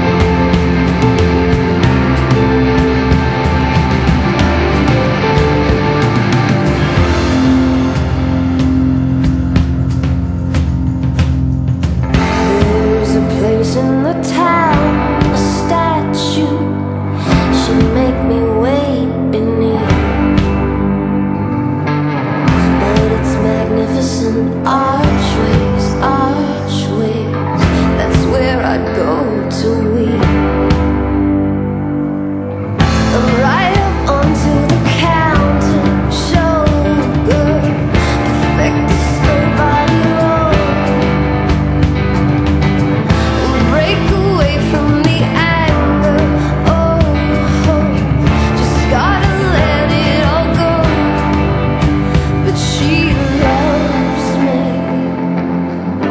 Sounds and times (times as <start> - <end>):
Music: 0.0 - 56.1.